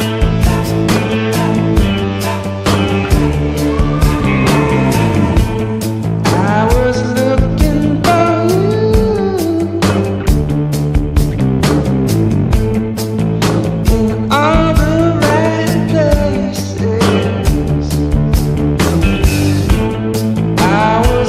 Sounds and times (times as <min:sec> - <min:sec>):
Rock music: 0:00.0 - 0:21.2.